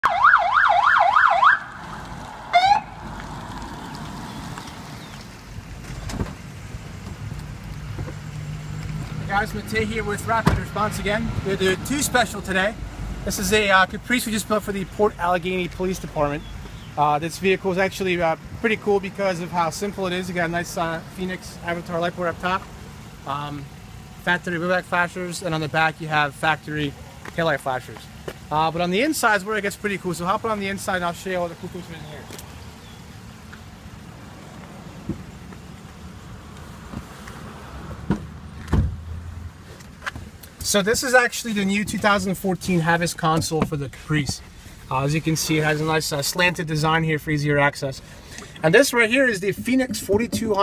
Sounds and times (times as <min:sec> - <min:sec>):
Car: 0:00.0 - 0:50.6
Outside, urban or manmade: 0:00.0 - 0:50.6
Speech: 0:09.3 - 0:16.4, 0:17.0 - 0:22.6, 0:23.2 - 0:32.4, 0:40.6 - 0:48.0, 0:48.6 - 0:50.6.